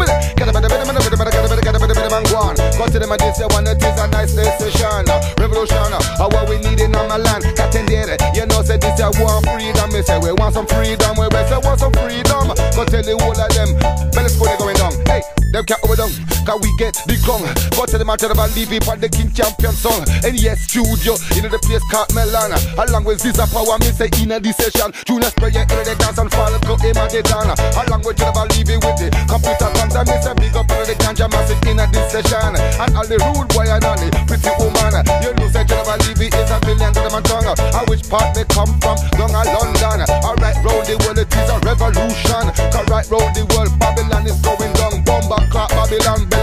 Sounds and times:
Music of Africa: 0:00.0 - 0:46.4.

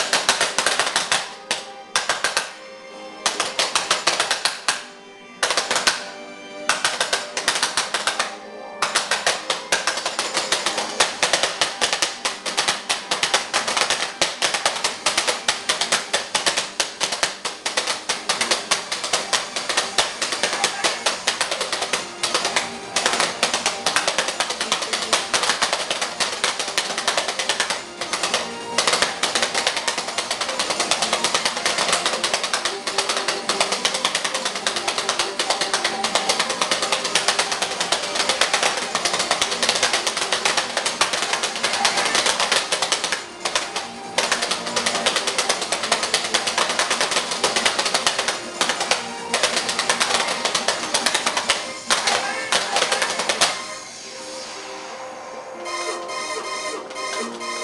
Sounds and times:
Music: 0:00.0 - 0:57.6
Speech: 0:20.4 - 0:21.2, 0:52.0 - 0:53.2.

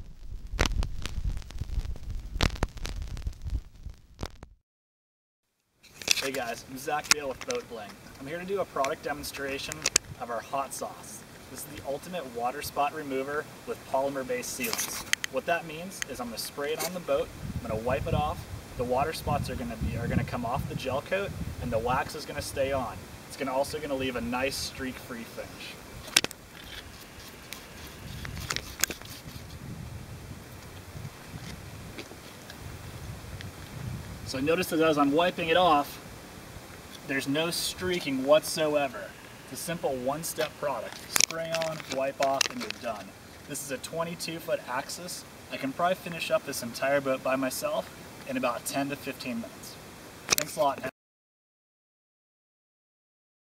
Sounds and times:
Speech: 0:06.2 - 0:25.8, 0:34.3 - 0:36.0, 0:37.1 - 0:51.0.

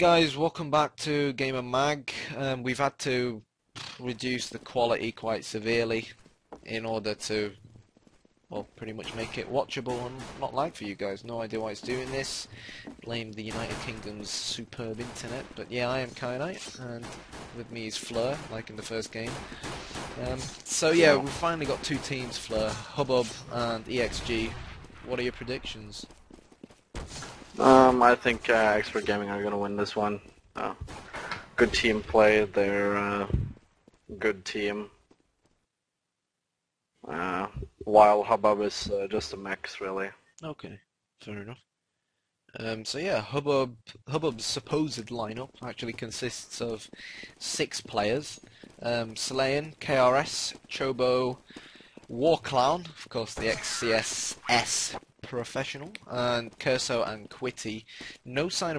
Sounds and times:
Speech: 0:00.0 - 0:03.4, 0:04.0 - 0:07.6, 0:08.5 - 0:19.5, 0:20.1 - 0:26.1, 0:27.6 - 0:30.8, 0:31.6 - 0:34.9, 0:37.1 - 0:41.6, 0:42.6 - 0:51.4, 0:52.1 - 0:58.7.

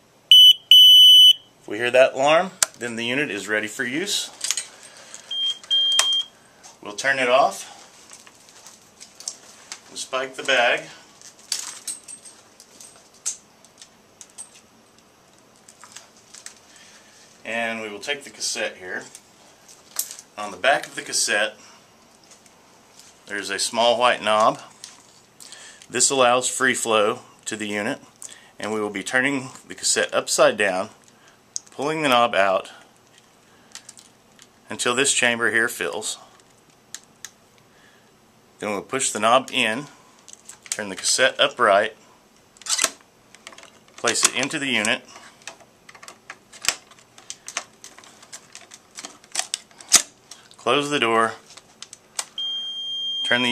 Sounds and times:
Speech: 0:01.7 - 0:04.4, 0:06.8 - 0:07.8, 0:09.9 - 0:11.0, 0:17.4 - 0:19.1, 0:20.4 - 0:21.6, 0:23.3 - 0:24.7, 0:25.9 - 0:31.0, 0:31.7 - 0:32.8, 0:34.7 - 0:36.4, 0:38.6 - 0:40.0, 0:40.8 - 0:42.0, 0:44.0 - 0:45.1, 0:50.6 - 0:51.5, 0:53.3 - 0:53.5.

